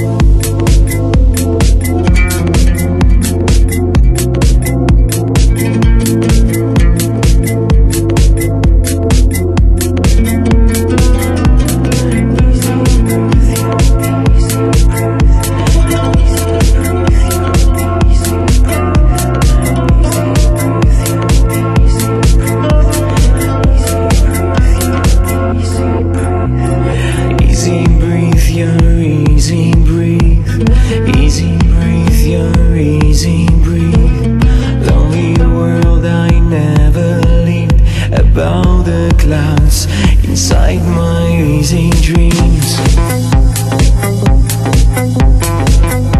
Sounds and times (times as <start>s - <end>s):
Music: 0.0s - 46.2s.